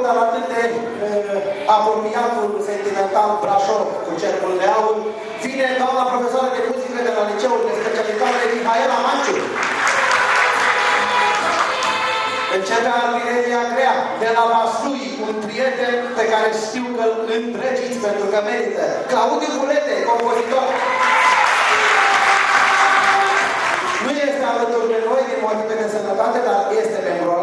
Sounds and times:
Male speech, man speaking: 0:00.0 - 0:09.5, 0:12.5 - 0:20.8, 0:24.0 - 0:27.4
Music: 0:07.8 - 0:14.2.

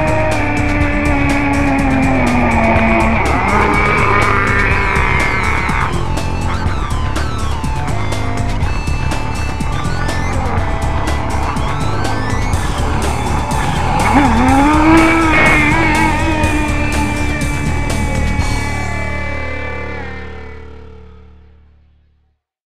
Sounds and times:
Music: 0:00.0 - 0:22.4.

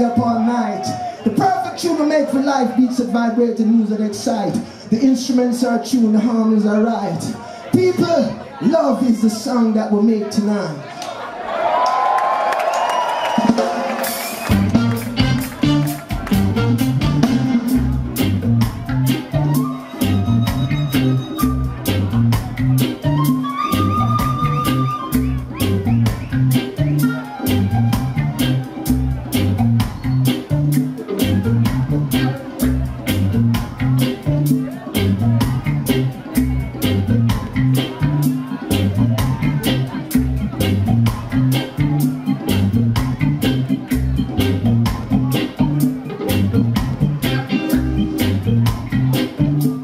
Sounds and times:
Music: 0:13.2 - 0:49.8.

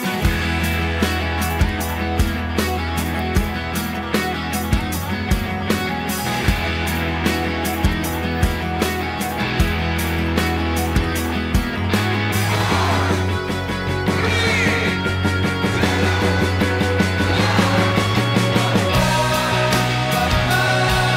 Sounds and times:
Music: 0:00.0 - 0:21.1
Speech: 0:14.1 - 0:15.1.

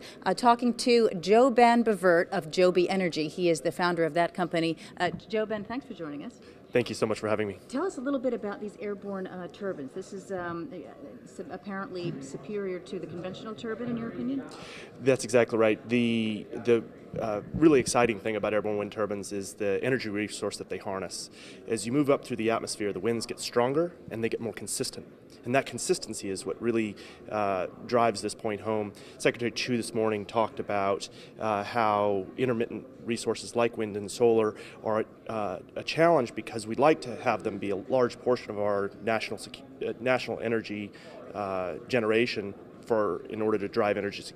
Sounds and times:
Speech: 0:13.8 - 0:44.3.

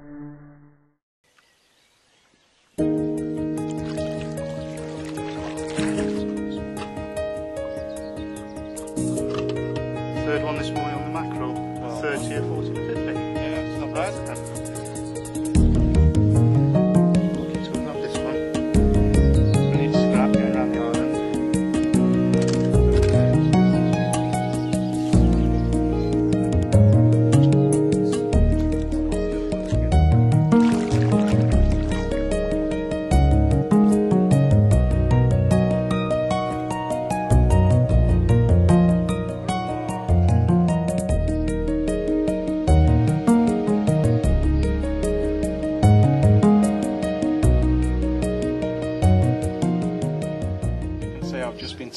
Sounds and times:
Music: 0:02.8 - 0:51.9
Speech: 0:10.2 - 0:14.4, 0:17.7 - 0:18.4, 0:19.7 - 0:21.1, 0:51.2 - 0:51.9.

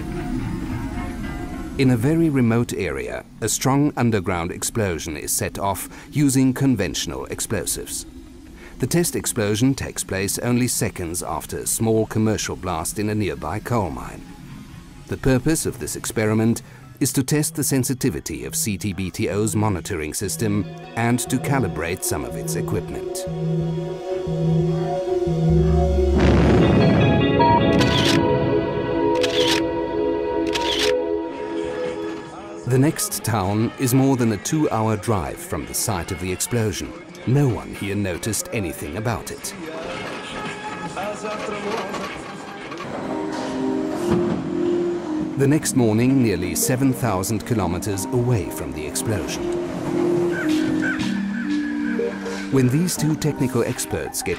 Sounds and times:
Music: 0:00.0 - 0:54.3
Speech: 0:01.8 - 0:08.0, 0:08.8 - 0:14.2, 0:15.1 - 0:23.3, 0:32.6 - 0:40.0, 0:41.0 - 0:42.1, 0:45.4 - 0:49.4, 0:52.5 - 0:54.3.

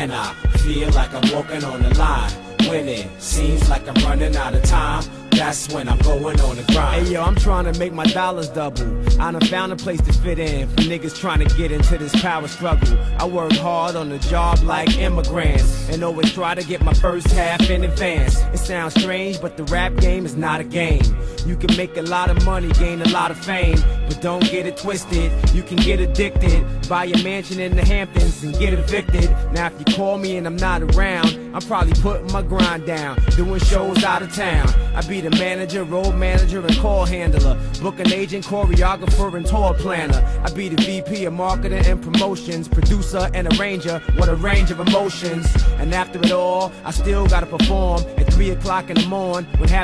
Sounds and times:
Music: 0:00.0 - 0:49.8.

